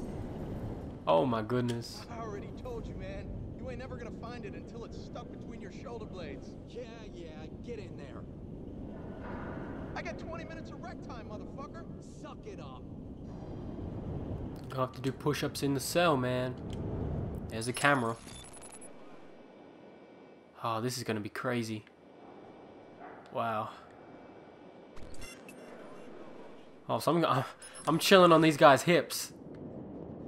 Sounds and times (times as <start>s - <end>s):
Speech: 1.1s - 8.2s, 10.0s - 12.8s, 14.7s - 16.6s, 17.5s - 18.2s, 20.6s - 21.9s, 23.4s - 23.8s, 26.9s - 29.3s.